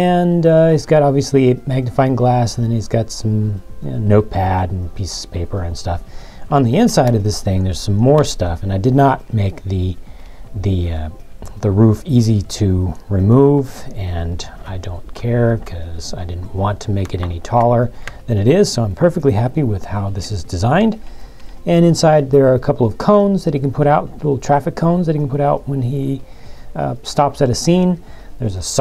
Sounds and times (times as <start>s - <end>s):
Speech: 0.0s - 10.0s, 10.6s - 21.0s, 21.6s - 26.2s, 26.8s - 28.8s
Music: 0.0s - 28.8s.